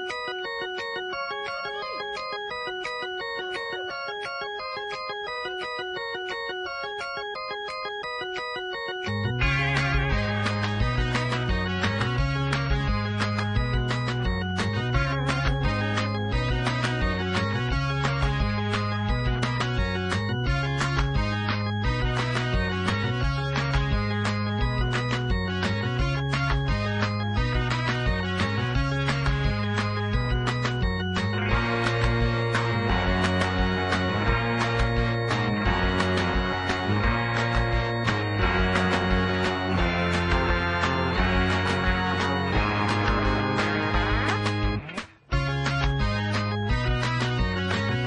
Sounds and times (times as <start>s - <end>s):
Music: 0.0s - 48.0s.